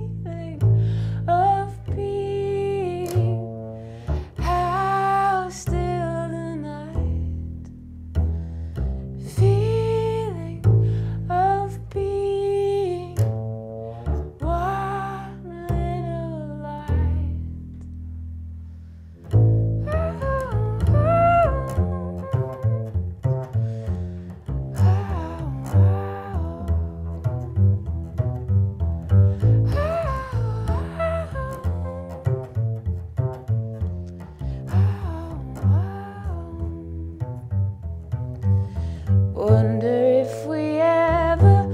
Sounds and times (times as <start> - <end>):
Double bass: 0.0 - 41.7
Plucked string instrument: 0.0 - 41.7.